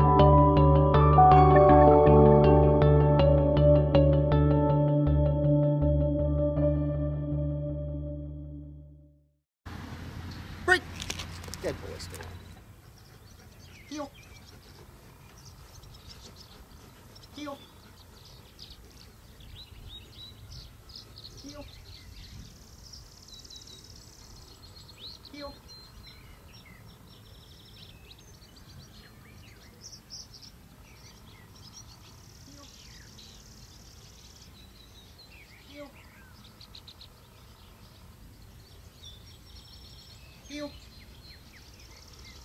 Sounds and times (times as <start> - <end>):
Outside, rural or natural: 0.0 - 9.1, 9.7 - 42.4
Environmental noise: 9.7 - 42.4
Speech: 11.5 - 12.4, 13.9 - 14.2, 17.4 - 17.7, 25.3 - 25.6, 35.7 - 36.0, 40.5 - 40.8.